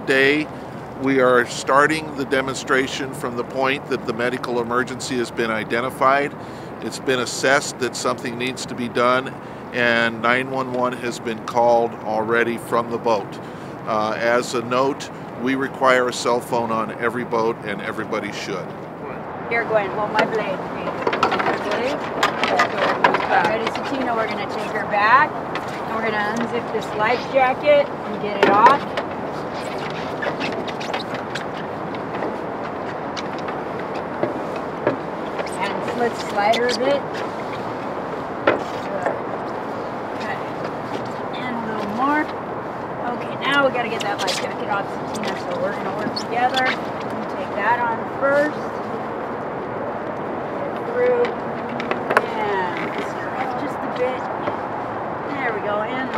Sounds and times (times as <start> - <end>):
Speech: 0.0 - 22.0, 22.6 - 25.3, 25.9 - 28.8, 35.6 - 37.0, 43.0 - 48.7, 52.2 - 54.3, 55.3 - 56.1.